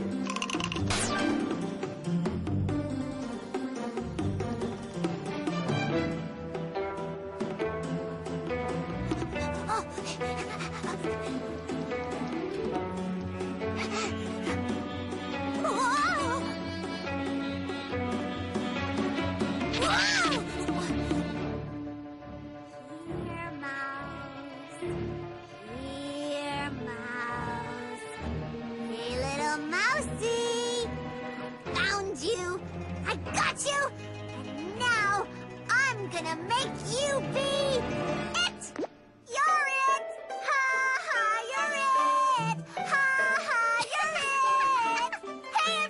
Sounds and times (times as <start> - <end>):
Music: 0.0 - 45.9.